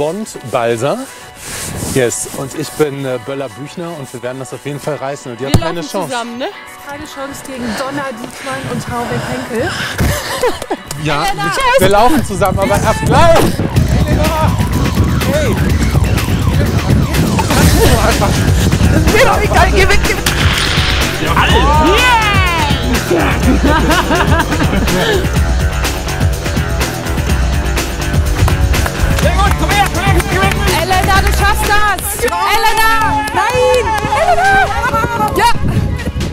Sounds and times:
Music: 0.0s - 36.3s.

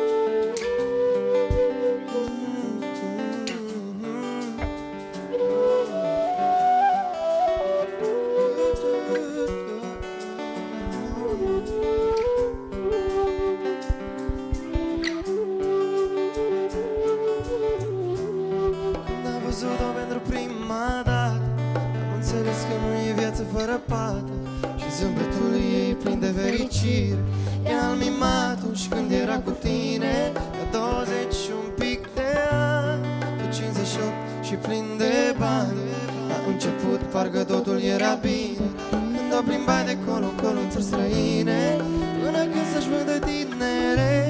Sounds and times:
Music: 0.0s - 44.3s.

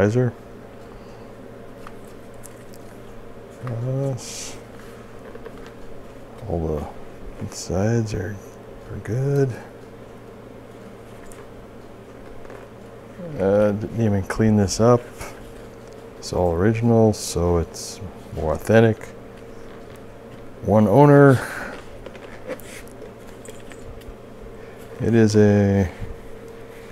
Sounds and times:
Speech: 0.0s - 0.4s, 3.6s - 4.6s, 6.4s - 9.7s, 13.2s - 15.1s, 16.2s - 19.2s, 20.6s - 21.5s, 25.0s - 26.1s.

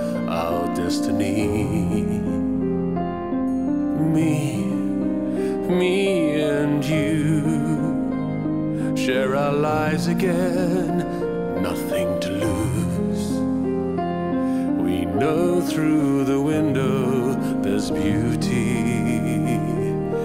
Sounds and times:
Music: 0.0s - 20.2s.

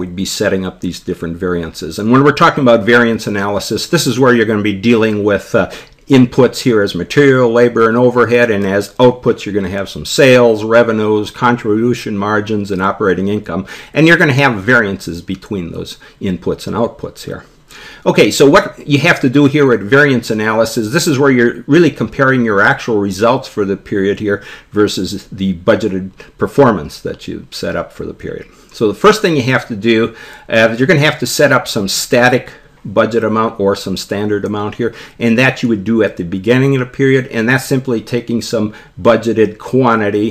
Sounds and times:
Speech: 0.0s - 40.3s.

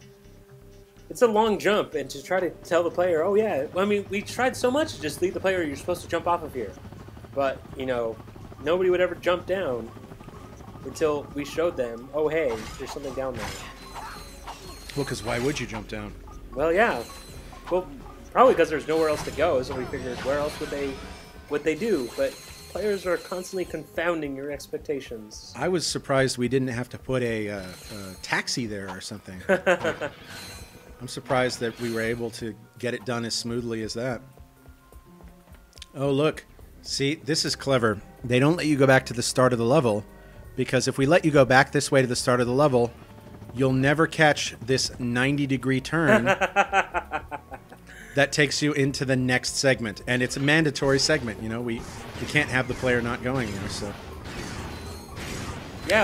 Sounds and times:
Music: 0.0s - 56.0s
Speech: 1.1s - 6.7s, 7.4s - 9.9s, 10.8s - 13.5s, 15.0s - 17.0s, 17.7s - 29.5s, 31.0s - 34.2s, 35.9s - 40.0s, 40.6s - 42.9s, 43.6s - 46.3s, 48.2s - 54.0s.

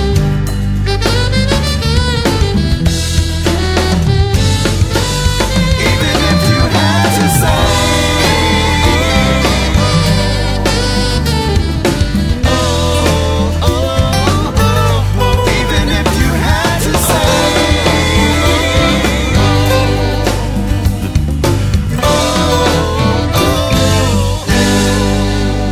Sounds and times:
Music: 0.0s - 25.7s
Singing: 5.4s - 21.1s, 22.0s - 25.7s.

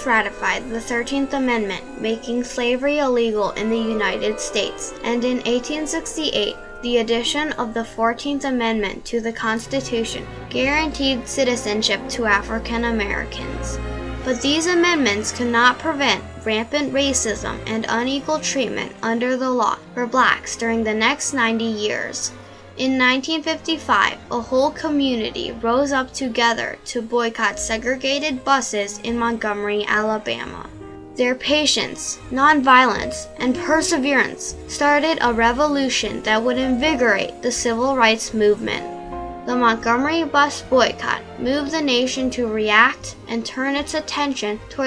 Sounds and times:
Speech: 0.0s - 38.9s, 39.5s - 44.8s
Music: 0.0s - 44.8s.

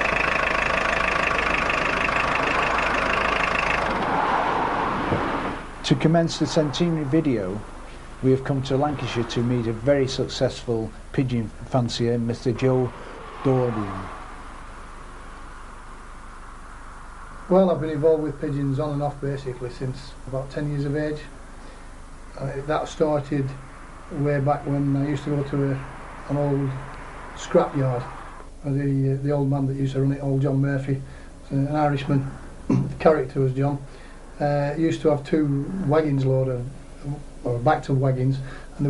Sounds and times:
Speech: 5.8s - 14.1s, 17.5s - 21.3s, 22.4s - 23.6s, 24.2s - 26.8s, 27.4s - 38.8s.

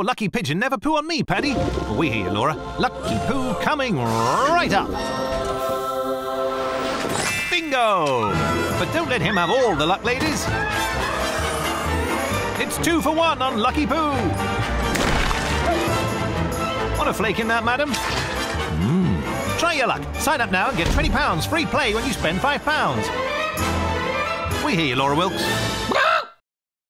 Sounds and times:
Speech: 0.0s - 4.8s, 7.5s - 10.5s, 12.6s - 14.3s, 17.0s - 18.0s, 19.6s - 23.1s, 24.6s - 25.5s
Music: 1.4s - 26.0s.

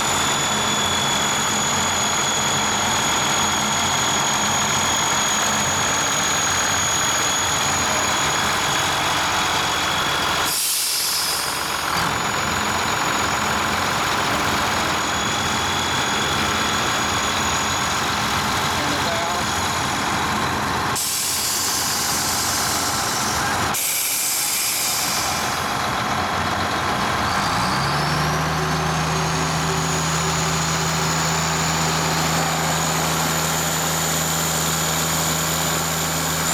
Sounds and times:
Speech: 18.7s - 19.5s.

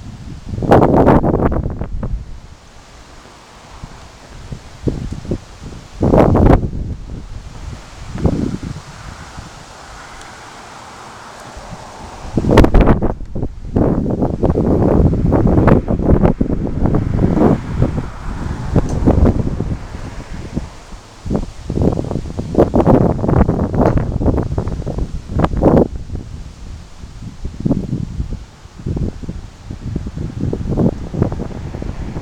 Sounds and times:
Wind noise (microphone): 0.0s - 2.6s, 3.7s - 10.2s, 11.4s - 32.2s.

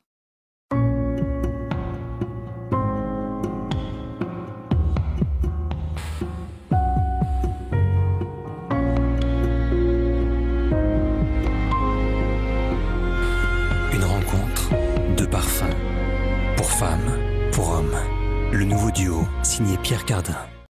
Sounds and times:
Music: 0.7s - 20.7s
Speech: 13.9s - 15.8s, 16.6s - 20.6s.

